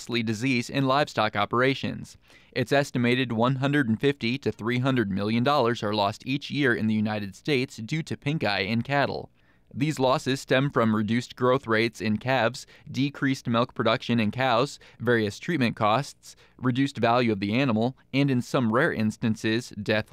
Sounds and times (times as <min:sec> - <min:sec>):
Speech: 0:00.0 - 0:20.1.